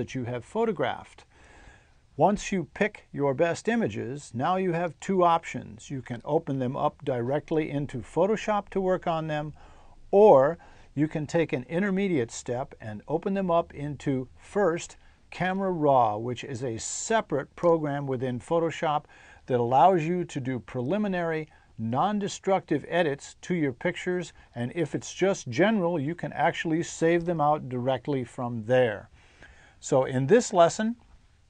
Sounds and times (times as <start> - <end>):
Speech: 0.0 - 1.3, 2.2 - 29.1, 29.8 - 31.1.